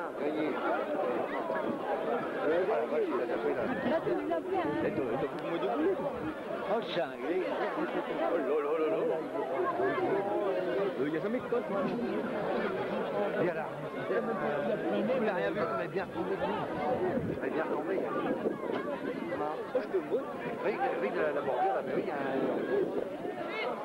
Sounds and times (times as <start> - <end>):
Speech: 0.0 - 23.8.